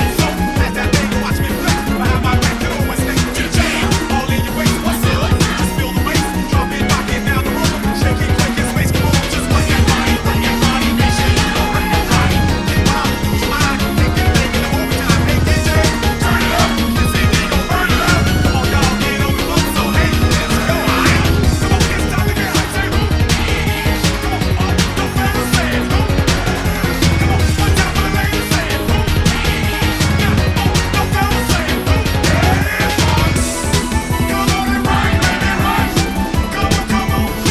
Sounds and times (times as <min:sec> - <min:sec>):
Music: 0:00.0 - 0:37.5.